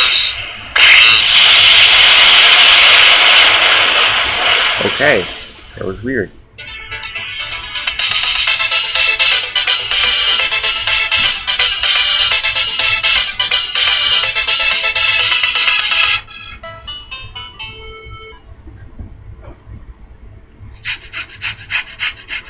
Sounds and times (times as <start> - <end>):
Music: 6.6 - 18.6
Pant: 20.7 - 22.4.